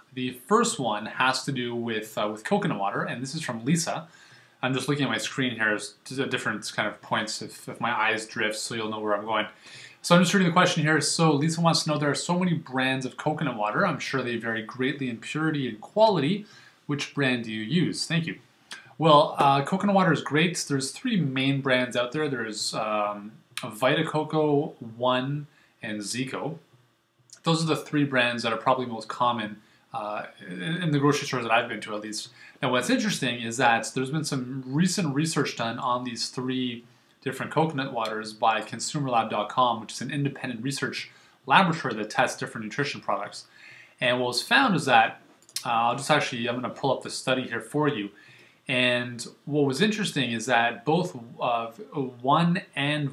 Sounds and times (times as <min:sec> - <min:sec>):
Speech: 0:00.0 - 0:26.7, 0:27.3 - 0:53.1.